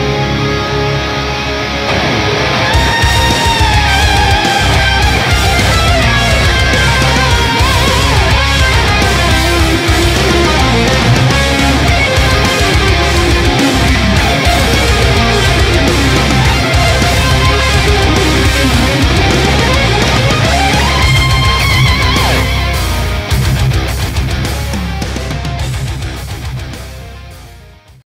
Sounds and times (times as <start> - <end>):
Music: 0.0 - 28.0.